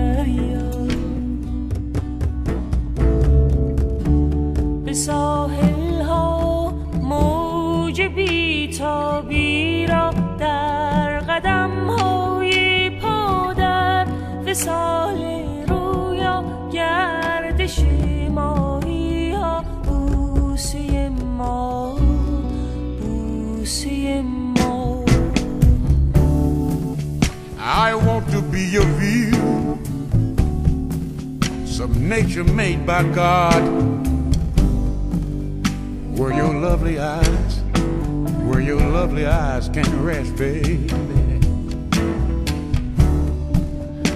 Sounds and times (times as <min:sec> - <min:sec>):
Music: 0:00.0 - 0:44.1.